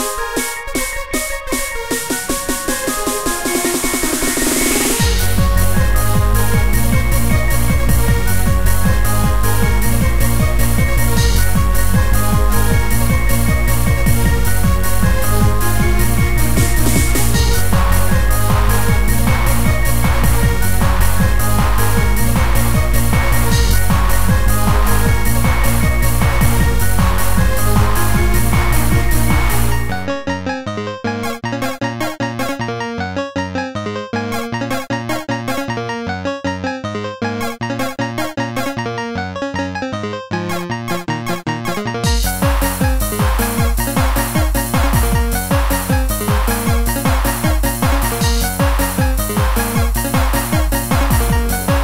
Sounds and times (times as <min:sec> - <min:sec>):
Dance music: 0:00.0 - 0:51.8.